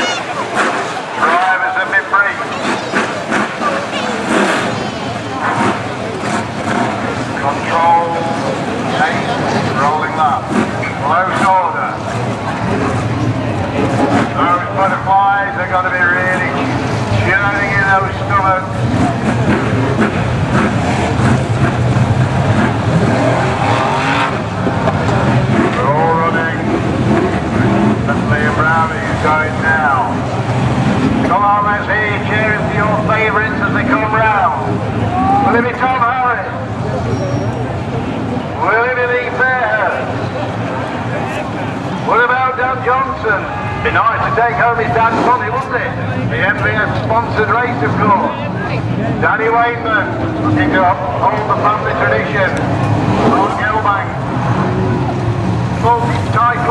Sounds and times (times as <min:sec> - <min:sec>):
Car: 0:00.0 - 0:56.7
Speech: 0:01.2 - 0:05.7, 0:07.4 - 0:12.8, 0:14.3 - 0:18.8, 0:25.1 - 0:26.7, 0:28.1 - 0:30.2, 0:31.3 - 0:36.7, 0:38.5 - 0:40.4, 0:41.1 - 0:52.6, 0:53.2 - 0:54.2, 0:55.8 - 0:56.7.